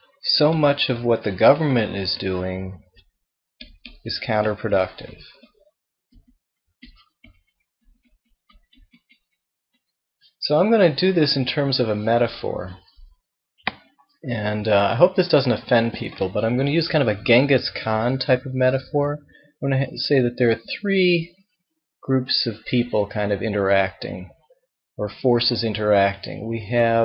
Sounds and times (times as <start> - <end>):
Narration, monologue: 0.0 - 5.6, 8.5 - 27.0
Male speech, man speaking: 0.2 - 2.8, 4.0 - 5.4, 10.4 - 12.9, 14.3 - 21.3, 22.0 - 24.3, 25.0 - 27.0.